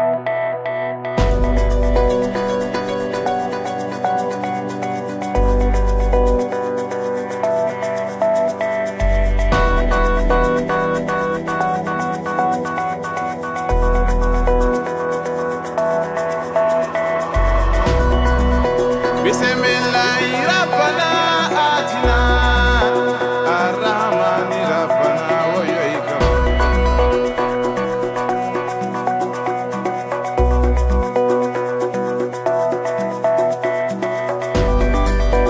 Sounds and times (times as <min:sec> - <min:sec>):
Music: 0:00.0 - 0:35.5.